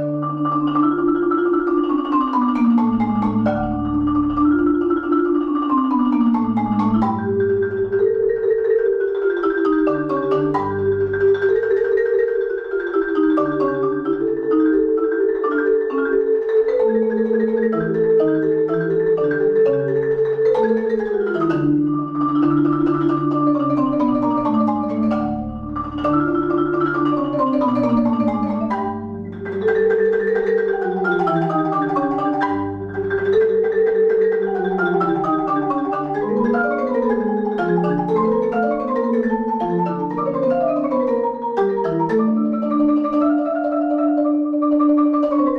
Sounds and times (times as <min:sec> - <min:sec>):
Vibraphone: 0:00.0 - 0:45.5.